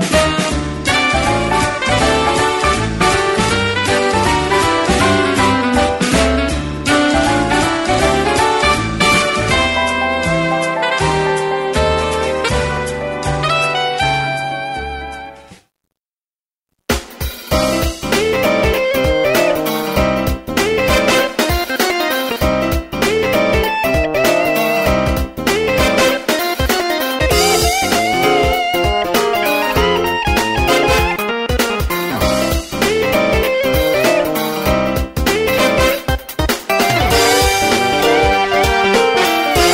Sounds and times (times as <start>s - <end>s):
Jingle (music): 0.0s - 15.5s, 17.2s - 39.7s.